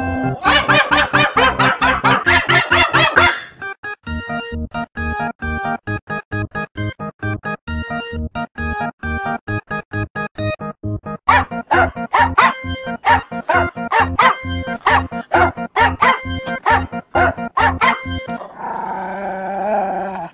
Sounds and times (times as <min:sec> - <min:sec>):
Music: 0:00.0 - 0:18.4
Yip: 0:00.4 - 0:03.6, 0:11.3 - 0:18.2.